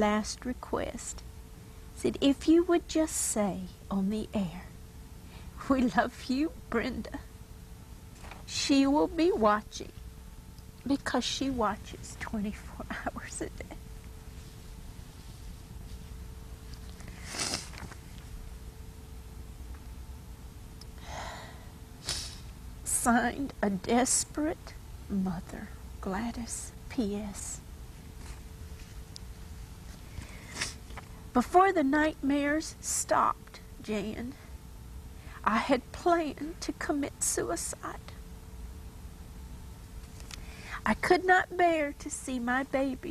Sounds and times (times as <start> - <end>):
Speech: 0.0 - 1.2, 2.0 - 4.8, 5.6 - 7.3, 8.5 - 10.0, 10.8 - 13.8, 22.9 - 27.6, 31.4 - 34.4, 35.4 - 38.2, 40.8 - 43.1.